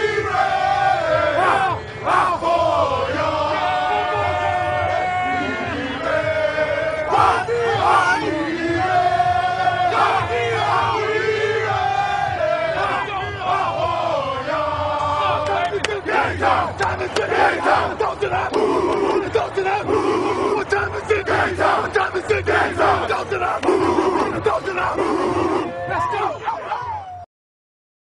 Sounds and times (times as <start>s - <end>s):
Speech: 19.2s - 27.2s.